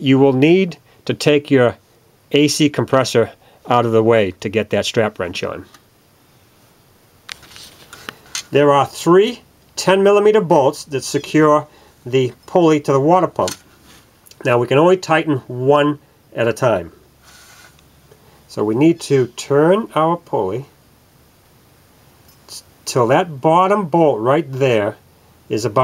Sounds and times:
Speech: 0:00.0 - 0:05.8, 0:08.5 - 0:13.6, 0:14.3 - 0:16.9, 0:18.5 - 0:20.8, 0:22.5 - 0:25.8.

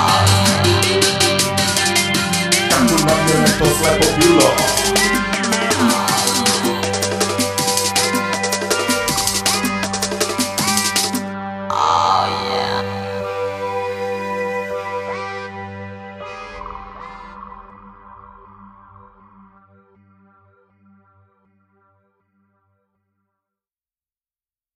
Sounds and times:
Electronic music: 0:00.0 - 0:20.0.

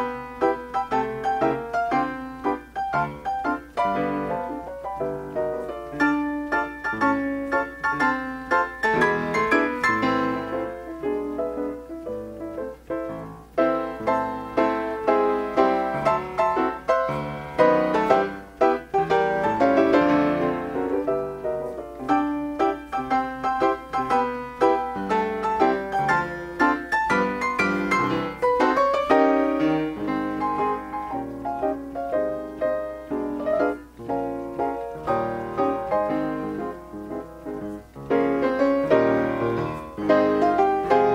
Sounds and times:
Piano: 0:00.0 - 0:41.1.

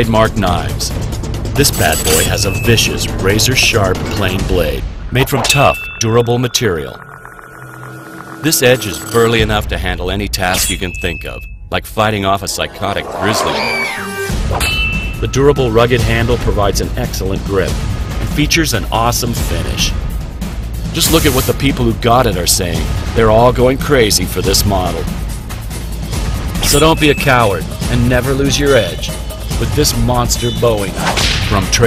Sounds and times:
Speech: 0:00.0 - 0:01.0, 0:01.6 - 0:07.0, 0:08.4 - 0:13.9, 0:15.2 - 0:20.0, 0:20.9 - 0:25.1, 0:26.6 - 0:31.8
Music: 0:00.0 - 0:31.8.

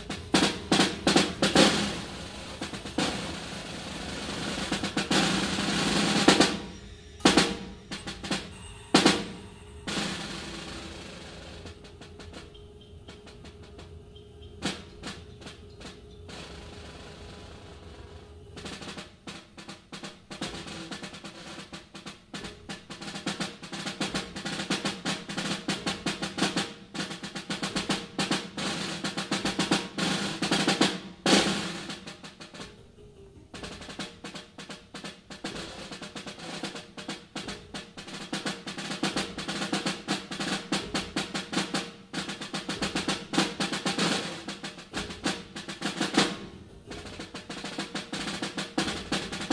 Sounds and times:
Drum roll: 0:00.0 - 0:49.5.

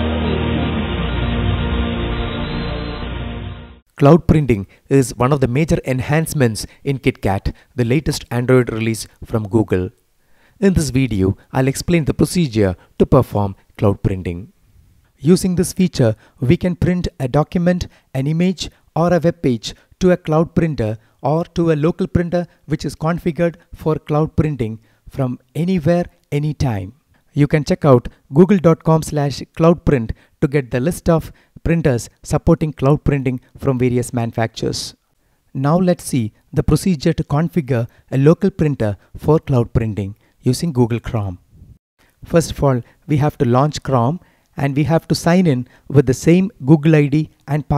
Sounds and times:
Speech: 0:04.0 - 0:10.0, 0:10.6 - 0:14.5, 0:15.2 - 0:41.4, 0:42.2 - 0:47.7.

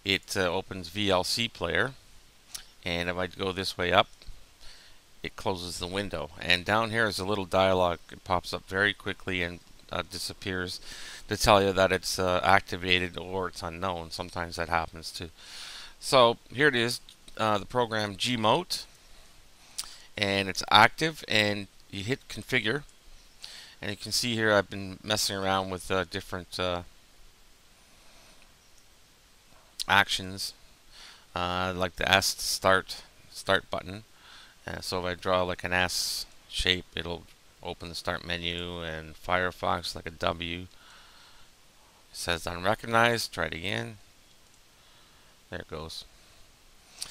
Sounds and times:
Speech: 0:00.1 - 0:02.0, 0:02.8 - 0:04.1, 0:05.2 - 0:15.3, 0:16.0 - 0:18.9, 0:20.2 - 0:22.9, 0:23.8 - 0:26.9, 0:29.8 - 0:30.6, 0:31.4 - 0:40.7, 0:42.2 - 0:44.0, 0:45.5 - 0:46.1.

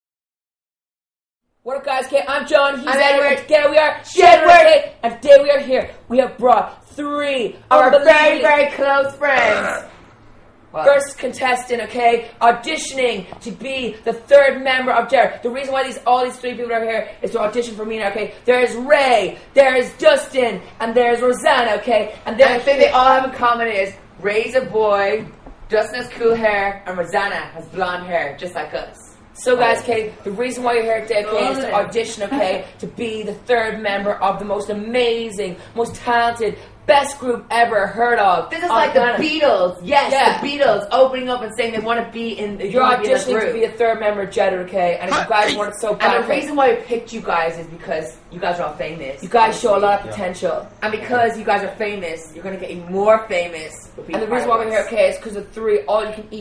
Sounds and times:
Speech: 0:01.7 - 0:09.9, 0:10.8 - 0:56.4.

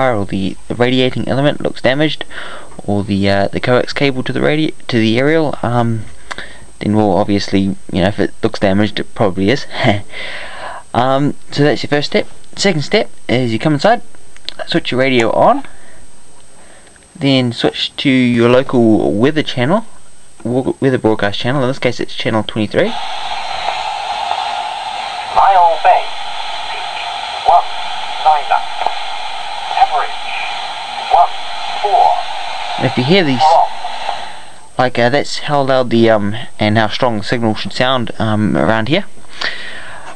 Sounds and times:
Speech: 0:00.0 - 0:06.1, 0:06.8 - 0:10.1, 0:10.9 - 0:15.7, 0:17.2 - 0:23.0, 0:25.3 - 0:26.1, 0:26.7 - 0:28.9, 0:29.7 - 0:30.5, 0:31.1 - 0:33.8, 0:34.8 - 0:39.1.

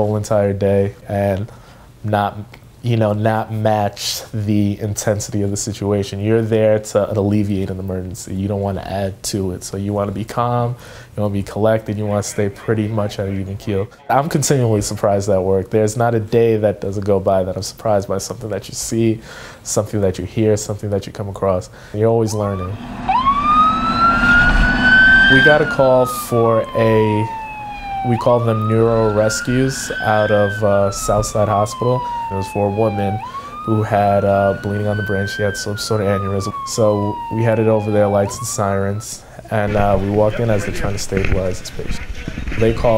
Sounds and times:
Speech: 0:00.0 - 0:22.8, 0:25.3 - 0:27.4, 0:28.0 - 0:42.9
Ambulance (siren): 0:22.3 - 0:39.2.

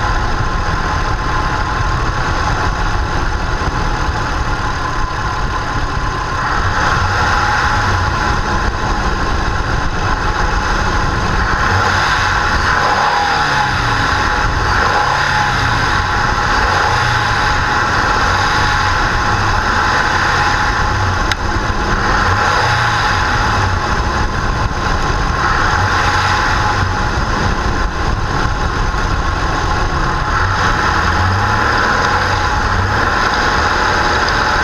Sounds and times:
Idling: 0:00.0 - 0:34.6
Medium engine (mid frequency): 0:00.0 - 0:34.6
Vehicle: 0:00.0 - 0:34.6
Accelerating, revving, vroom: 0:06.4 - 0:08.4, 0:11.4 - 0:21.1, 0:21.9 - 0:23.8, 0:25.4 - 0:27.5, 0:30.2 - 0:34.6.

